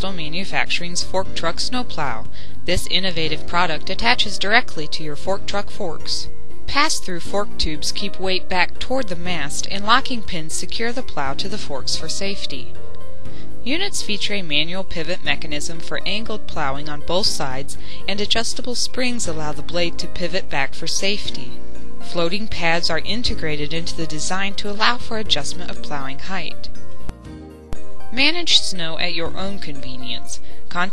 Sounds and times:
Speech: 0.0s - 12.7s, 13.7s - 26.7s, 28.2s - 30.9s
Music: 0.0s - 30.9s.

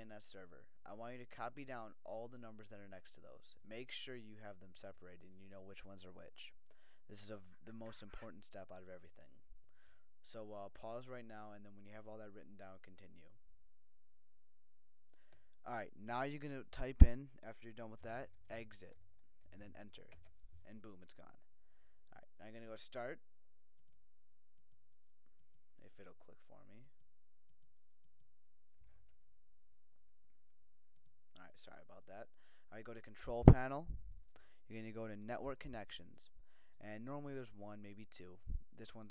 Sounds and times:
Speech: 0.0s - 9.4s, 10.2s - 13.4s, 15.6s - 21.5s, 22.1s - 23.2s, 25.8s - 27.0s, 31.4s - 33.9s, 34.7s - 39.1s.

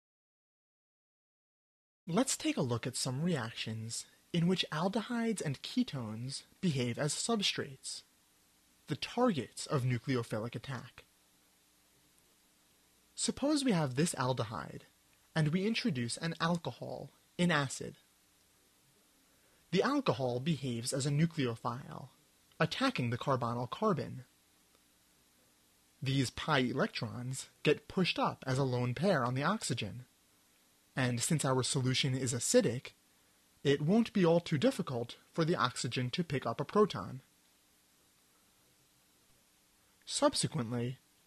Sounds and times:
Narration, monologue: 2.1s - 41.2s.

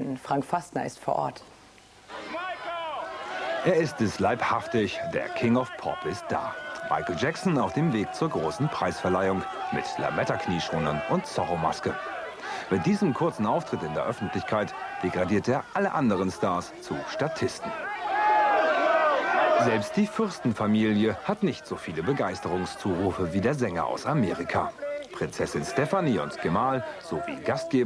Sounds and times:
Speech: 0.0s - 1.5s, 3.6s - 12.0s, 12.6s - 17.8s, 19.6s - 27.8s.

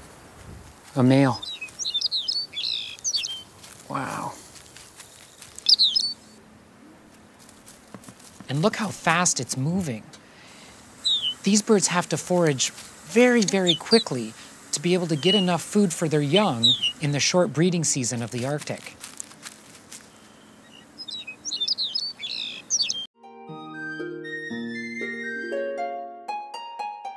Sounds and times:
Chirp, tweet: 1.4s - 3.4s, 5.7s - 6.2s, 11.1s - 11.4s, 16.3s - 17.0s, 20.2s - 23.1s.

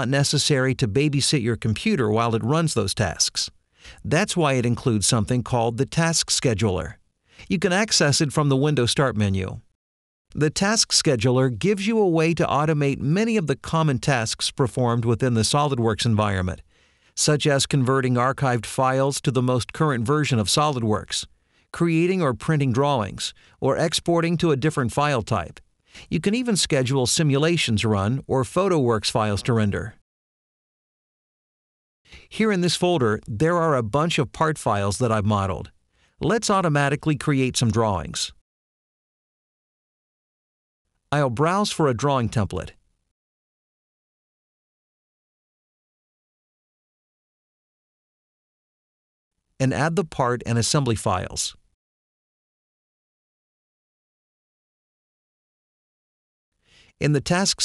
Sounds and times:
Speech synthesizer: 0.0s - 3.5s, 4.1s - 9.6s, 10.4s - 16.6s, 17.2s - 30.0s, 32.4s - 38.4s, 41.2s - 42.8s, 49.6s - 51.6s, 57.0s - 57.6s.

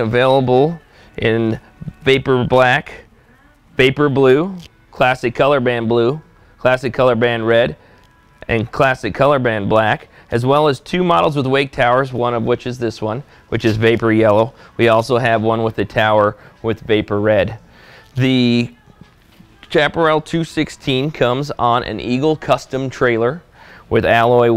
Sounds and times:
Speech: 0.0s - 3.1s, 3.8s - 7.8s, 8.4s - 17.6s, 18.2s - 18.8s, 19.7s - 24.5s
Music: 0.0s - 24.5s.

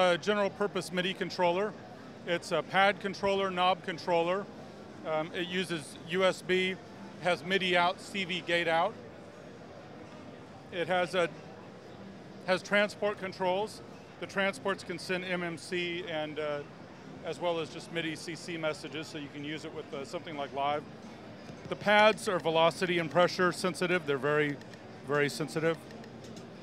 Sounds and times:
Speech: 0.0s - 9.0s, 10.6s - 11.4s, 12.4s - 20.9s, 21.6s - 25.9s.

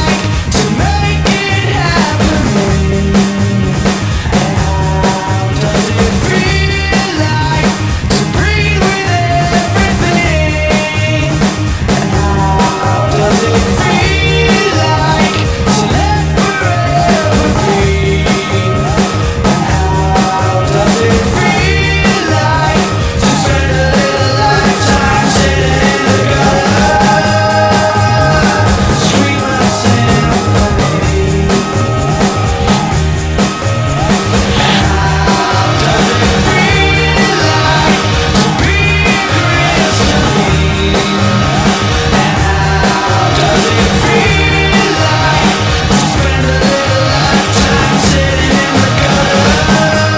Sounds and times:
Grunge: 0.0s - 50.1s.

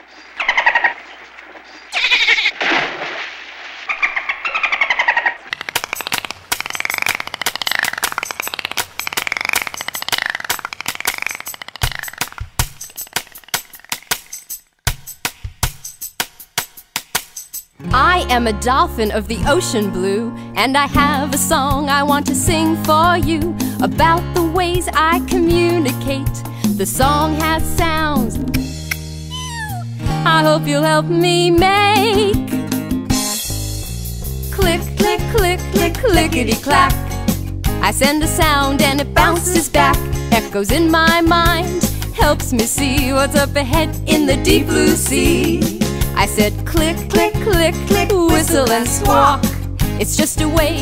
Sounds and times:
Music for children: 5.8s - 50.8s.

